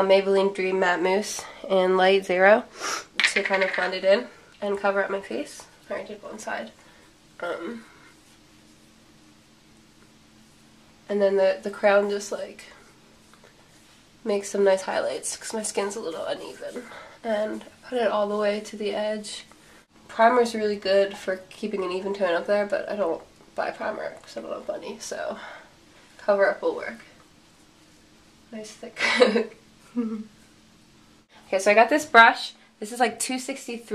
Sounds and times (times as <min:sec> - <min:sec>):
Speech: 0:00.0 - 0:02.7, 0:03.3 - 0:06.8, 0:07.4 - 0:07.9, 0:11.1 - 0:12.8, 0:14.2 - 0:19.5, 0:20.1 - 0:25.5, 0:26.2 - 0:27.1, 0:28.5 - 0:29.5, 0:31.5 - 0:33.9.